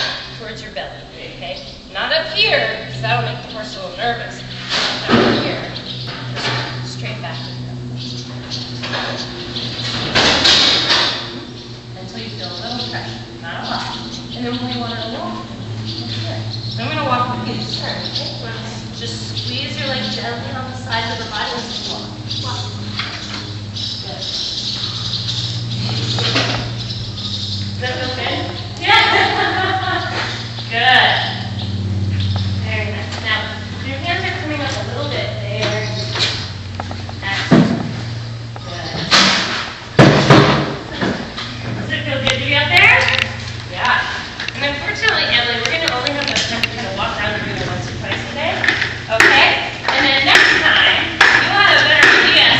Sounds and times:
Speech: 0:27.8 - 0:29.3, 0:32.6 - 0:36.1, 0:41.8 - 0:52.5.

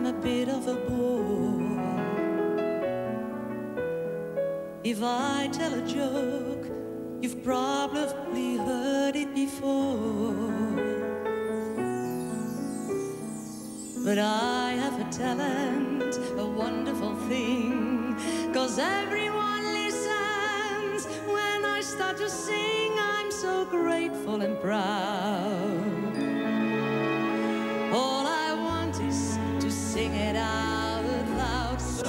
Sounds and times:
Independent music: 0:00.0 - 0:32.0.

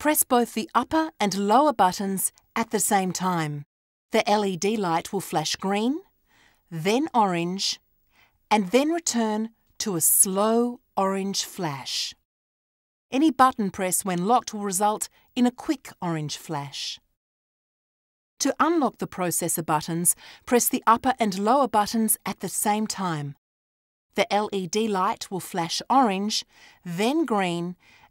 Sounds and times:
Speech: 0:00.0 - 0:06.1, 0:06.8 - 0:07.8, 0:08.5 - 0:12.2, 0:13.1 - 0:17.0, 0:18.4 - 0:23.4, 0:24.2 - 0:27.8.

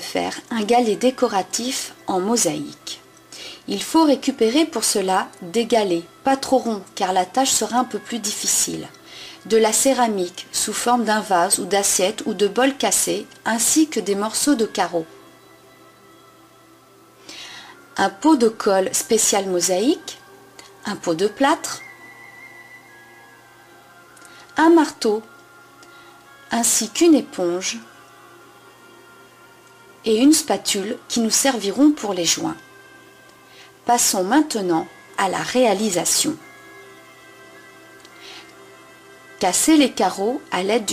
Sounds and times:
Speech: 0:00.0 - 0:03.0, 0:03.7 - 0:15.1, 0:18.0 - 0:20.2, 0:20.8 - 0:21.8, 0:24.6 - 0:25.3, 0:26.5 - 0:27.9, 0:30.1 - 0:32.6, 0:33.9 - 0:36.4, 0:39.4 - 0:40.9
Music: 0:00.0 - 0:40.9.

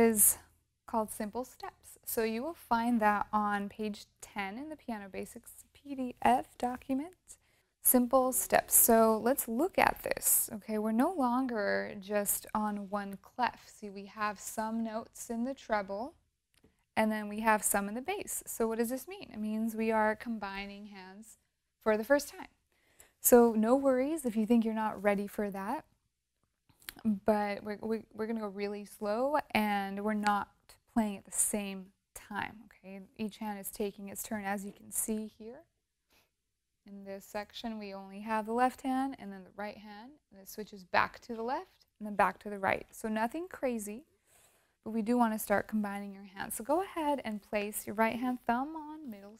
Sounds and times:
Speech: 0:00.0 - 0:16.2, 0:17.0 - 0:22.5, 0:23.2 - 0:25.9, 0:26.9 - 0:35.7, 0:36.9 - 0:44.0, 0:44.9 - 0:49.4.

